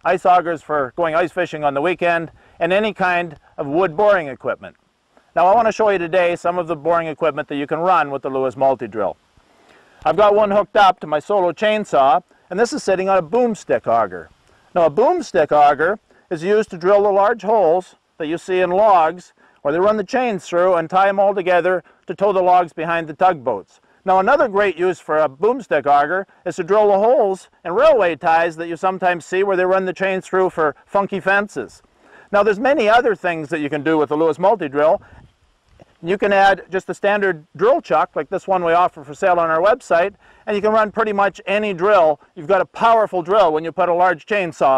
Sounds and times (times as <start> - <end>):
Speech: 0.0 - 4.8, 5.4 - 9.2, 10.0 - 35.0, 36.0 - 44.7.